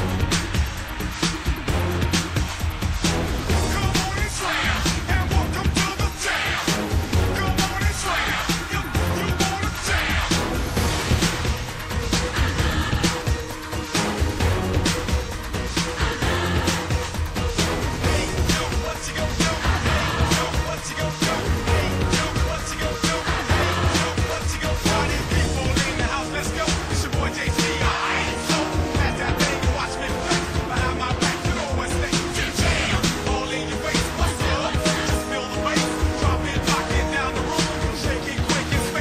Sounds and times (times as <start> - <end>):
Music: 0.0 - 39.0.